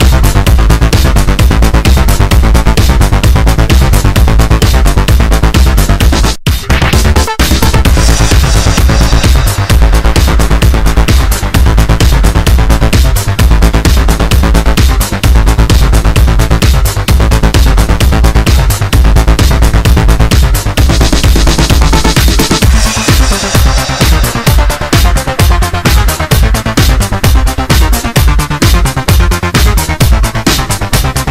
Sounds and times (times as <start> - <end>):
Music: 0.0 - 31.3.